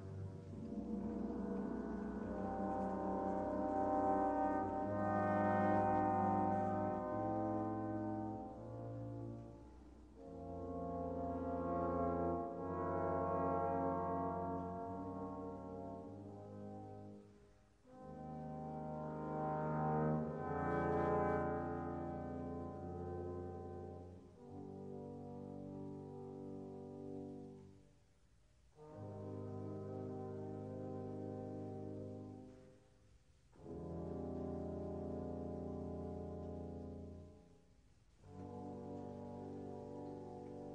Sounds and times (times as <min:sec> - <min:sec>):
Foghorn: 0:00.0 - 0:17.3, 0:17.9 - 0:27.6, 0:28.8 - 0:32.8, 0:33.6 - 0:37.5.